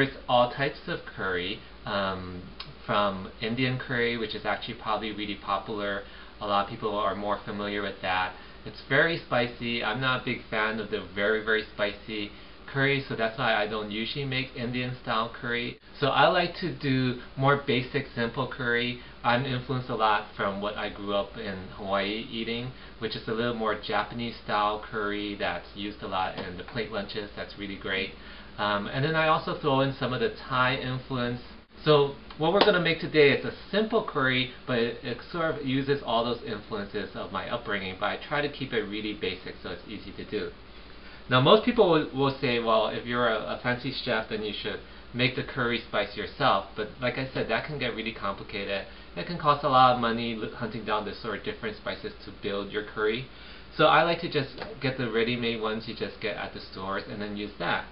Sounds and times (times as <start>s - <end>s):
Speech: 0.0s - 40.6s, 41.3s - 57.9s.